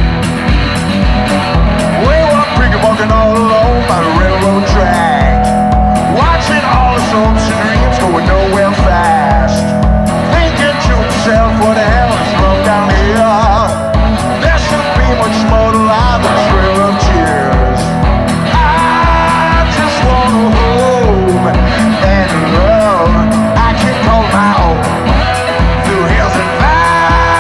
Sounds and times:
Steel guitar, slide guitar: 0.0 - 27.4.

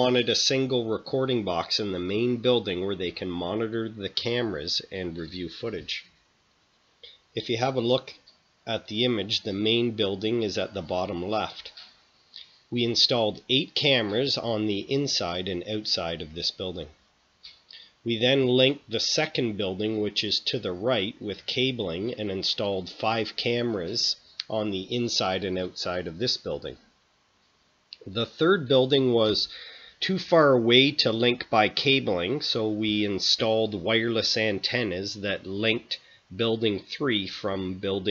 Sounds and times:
Speech: 0.0 - 6.1, 7.4 - 11.9, 12.7 - 17.0, 18.1 - 26.9, 28.0 - 38.1.

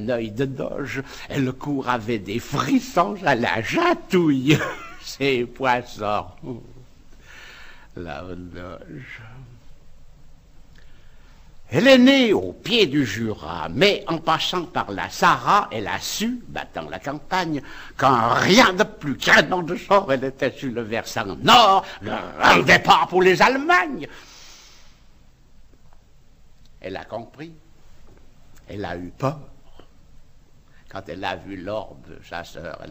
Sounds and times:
Narration, monologue: 0.0 - 32.9.

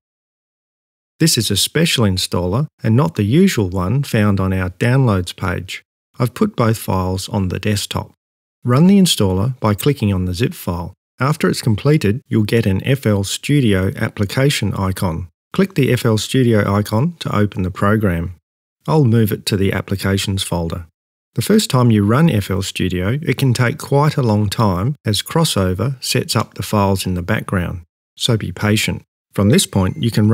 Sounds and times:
Speech: 1.2 - 30.3.

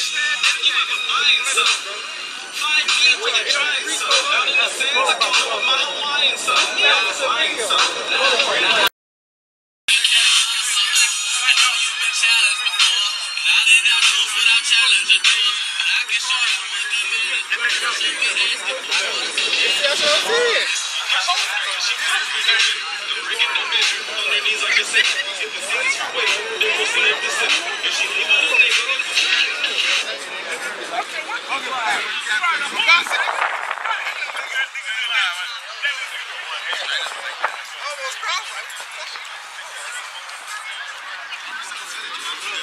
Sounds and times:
Music: 0.0 - 8.9, 9.9 - 42.6
Speech: 0.0 - 8.9, 9.9 - 42.6
Outside, urban or manmade: 0.0 - 9.0, 9.9 - 42.6.

